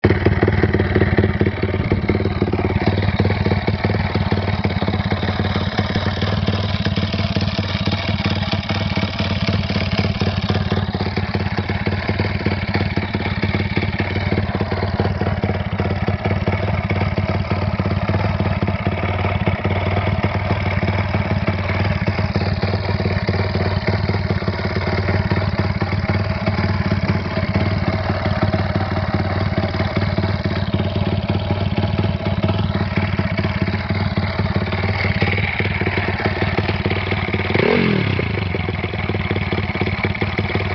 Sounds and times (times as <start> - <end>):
Idling: 0.0 - 40.7
Medium engine (mid frequency): 0.0 - 40.7
Vehicle: 0.0 - 40.7
Accelerating, revving, vroom: 37.5 - 38.2.